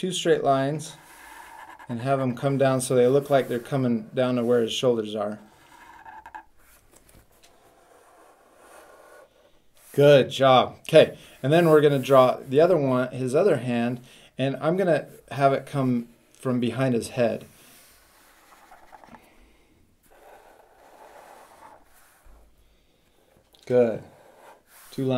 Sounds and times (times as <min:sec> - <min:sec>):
Inside, small room: 0:00.0 - 0:25.1
Speech: 0:01.9 - 0:05.4, 0:09.9 - 0:17.5, 0:23.6 - 0:24.1, 0:24.9 - 0:25.1.